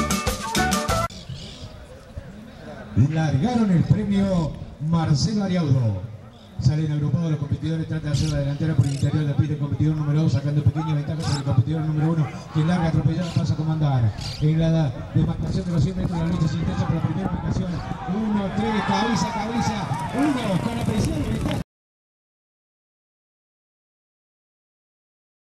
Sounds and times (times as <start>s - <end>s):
Speech: 1.6s - 21.6s.